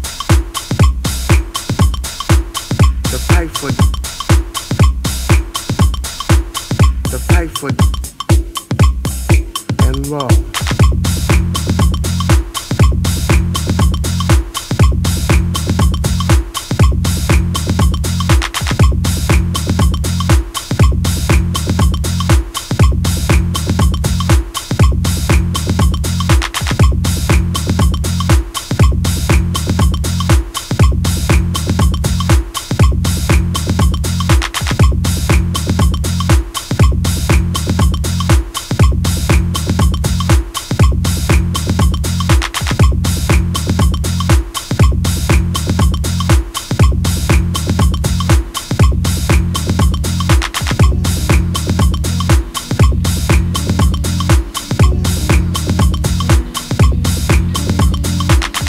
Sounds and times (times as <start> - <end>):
Electronica: 0.0 - 58.6.